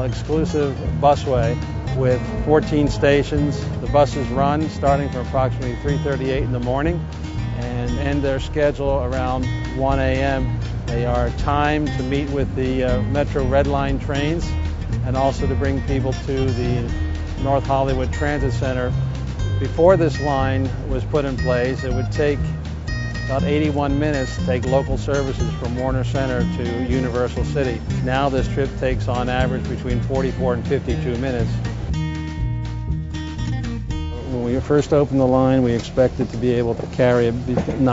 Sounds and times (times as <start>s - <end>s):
Speech: 0.0s - 7.0s, 7.6s - 19.0s, 19.6s - 22.5s, 23.3s - 31.6s, 34.2s - 37.9s
Music: 0.0s - 37.9s.